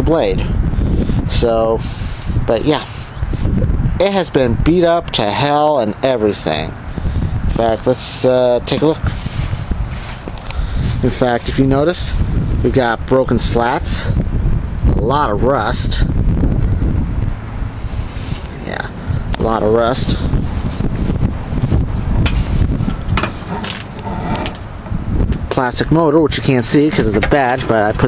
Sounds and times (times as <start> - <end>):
Speech: 0.0 - 0.6, 1.3 - 1.9, 2.5 - 3.0, 4.0 - 6.8, 7.5 - 9.2, 11.0 - 14.2, 14.9 - 16.2, 18.5 - 20.3, 25.5 - 28.0
Wind: 0.0 - 28.0.